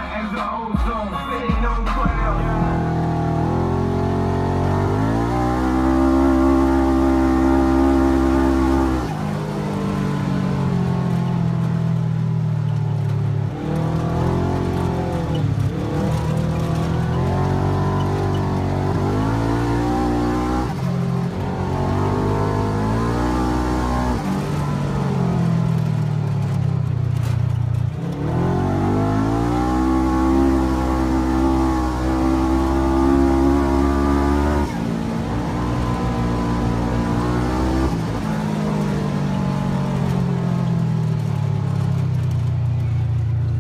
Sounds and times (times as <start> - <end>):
Race car, auto racing: 1.9 - 43.6.